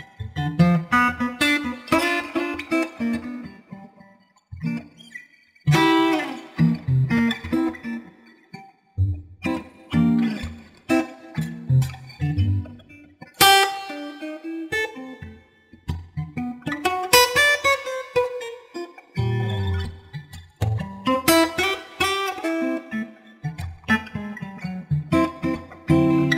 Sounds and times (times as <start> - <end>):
Steel guitar, slide guitar: 9.5 - 12.8, 13.4 - 15.3, 20.6 - 26.3.